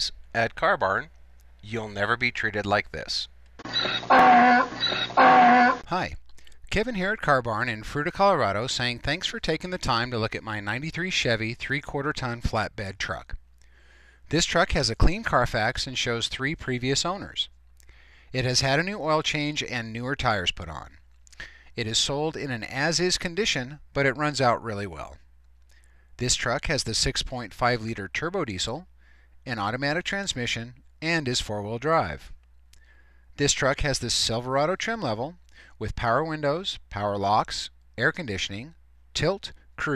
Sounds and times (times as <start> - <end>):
Speech: 0.0 - 3.3, 5.9 - 13.4, 14.3 - 17.5, 18.4 - 21.0, 21.8 - 25.2, 26.2 - 28.9, 29.5 - 32.4, 33.4 - 39.9.